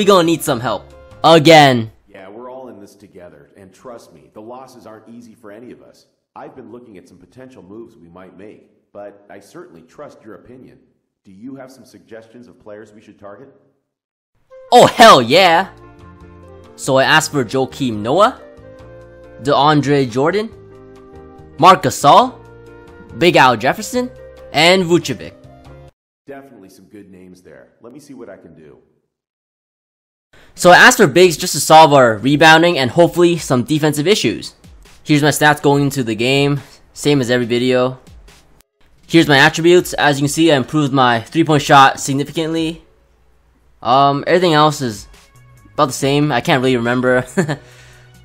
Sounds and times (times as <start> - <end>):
Speech: 0.0 - 13.6, 14.7 - 15.8, 16.8 - 18.4, 19.4 - 20.6, 21.6 - 22.4, 23.1 - 25.4, 26.3 - 28.9, 30.6 - 38.0, 39.1 - 42.9, 43.8 - 45.1, 45.8 - 47.4.